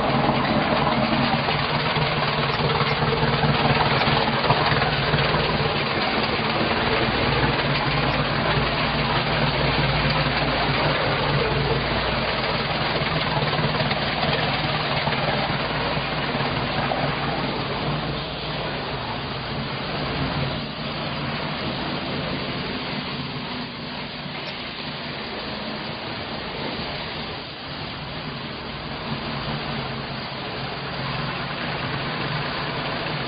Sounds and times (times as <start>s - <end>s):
Vehicle: 0.0s - 33.2s.